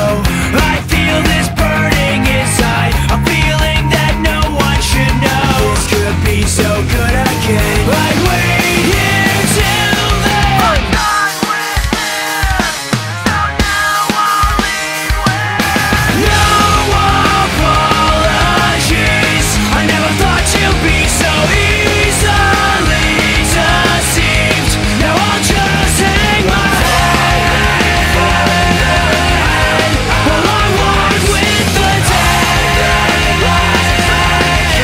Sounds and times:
Sampler: 0:01.0 - 0:34.8.

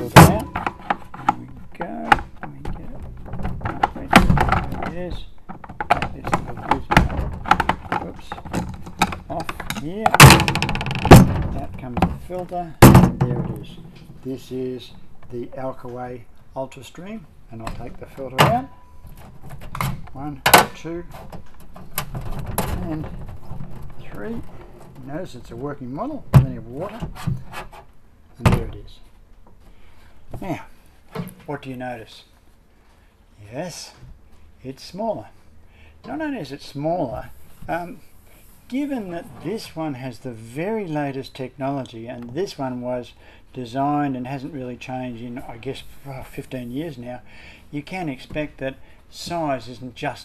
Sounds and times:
Speech: 0:00.0 - 0:00.6, 0:01.2 - 0:05.3, 0:06.0 - 0:07.3, 0:07.9 - 0:08.5, 0:09.3 - 0:10.4, 0:11.2 - 0:18.8, 0:20.1 - 0:21.2, 0:22.6 - 0:23.2, 0:24.0 - 0:27.1, 0:28.4 - 0:29.1, 0:30.4 - 0:30.8, 0:31.4 - 0:32.3, 0:33.4 - 0:34.0, 0:34.6 - 0:35.4, 0:36.1 - 0:38.1, 0:38.7 - 0:50.2
Inside, small room: 0:00.0 - 0:50.2.

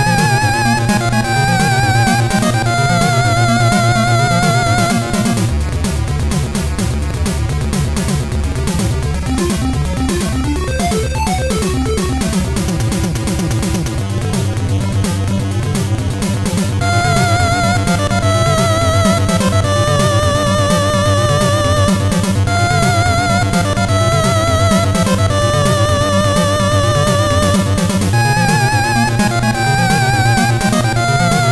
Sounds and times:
Music: 0:00.0 - 0:31.5.

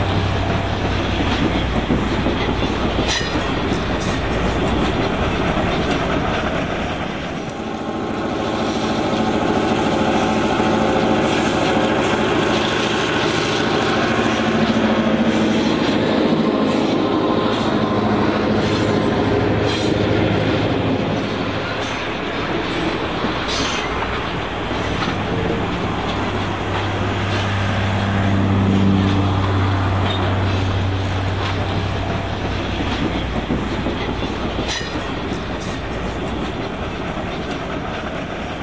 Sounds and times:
Outside, urban or manmade: 0:00.0 - 0:38.6
Railroad car, train wagon: 0:00.0 - 0:38.6
Train: 0:00.0 - 0:38.6.

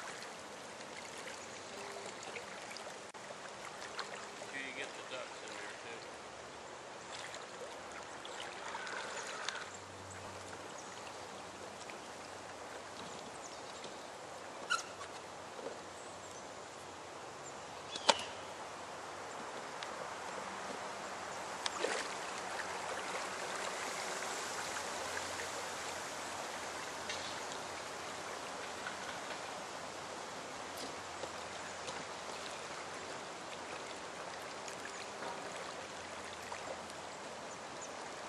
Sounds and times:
Rowboat, canoe, kayak: 0:00.0 - 0:38.2.

